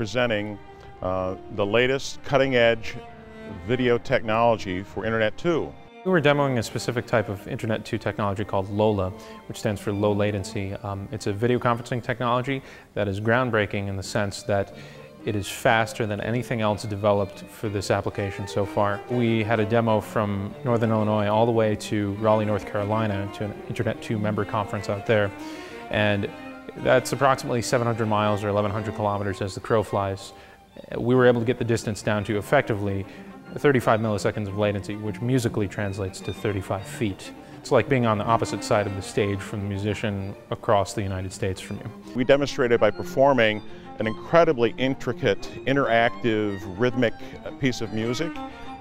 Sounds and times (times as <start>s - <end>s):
Speech: 0.0s - 3.0s, 3.6s - 48.4s
Music: 0.0s - 48.8s.